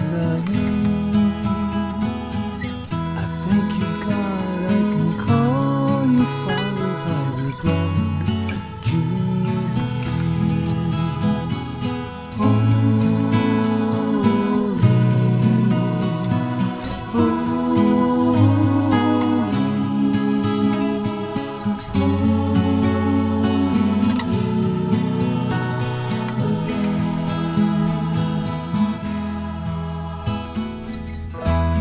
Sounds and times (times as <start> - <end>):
Christmas music: 0.0 - 31.8
Gospel music: 0.0 - 31.8.